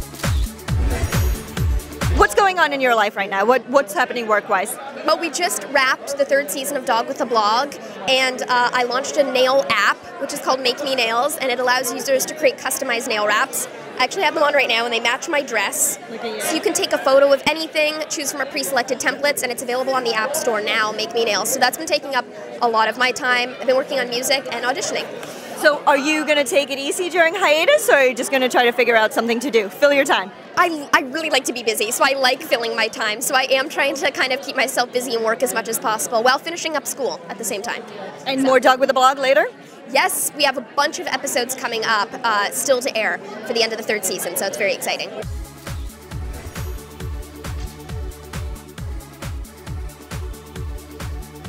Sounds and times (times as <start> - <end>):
Speech: 2.2 - 45.2.